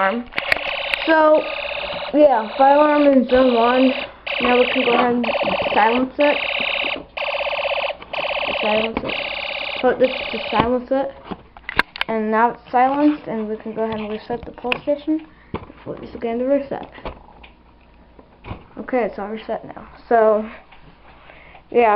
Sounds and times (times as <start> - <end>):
Fire alarm: 0.4 - 10.7
Speech: 2.2 - 6.4, 8.6 - 9.0, 12.1 - 15.3, 15.9 - 16.9, 18.8 - 20.6, 21.7 - 21.9.